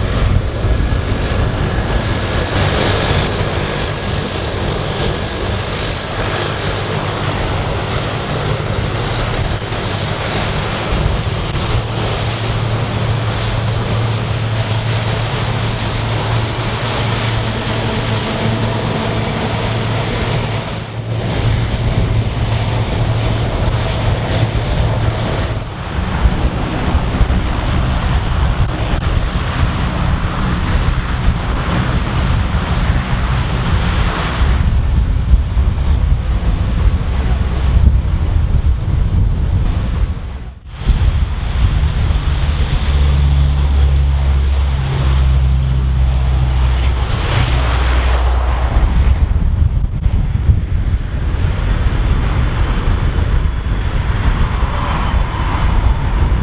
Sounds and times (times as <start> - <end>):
Propeller, airscrew: 0.0 - 56.4.